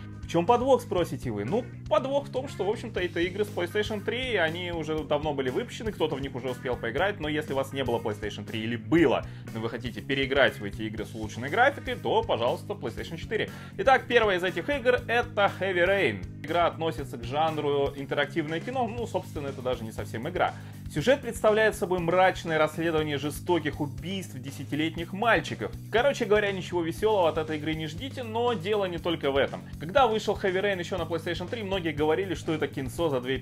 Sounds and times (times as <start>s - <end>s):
Music: 0.0s - 33.4s
Speech: 0.3s - 33.4s.